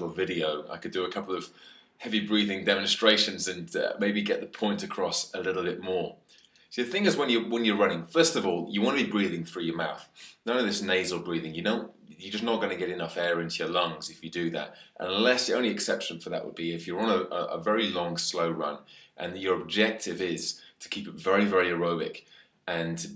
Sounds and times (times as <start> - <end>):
Male speech, man speaking: 0.0 - 6.2, 6.8 - 23.1
Inside, small room: 0.0 - 23.1.